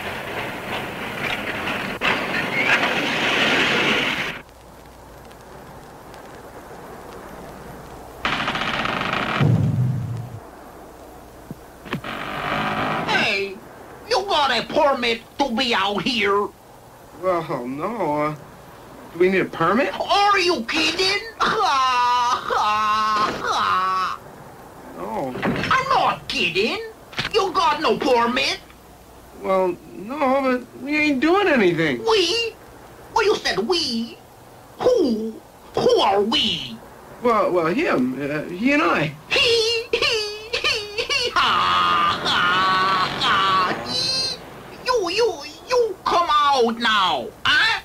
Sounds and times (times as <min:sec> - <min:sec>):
Speech: 0:13.1 - 0:16.6, 0:17.2 - 0:18.4, 0:19.2 - 0:22.8, 0:24.9 - 0:28.7, 0:29.4 - 0:32.6, 0:33.2 - 0:34.2, 0:34.8 - 0:41.5, 0:42.1 - 0:47.8.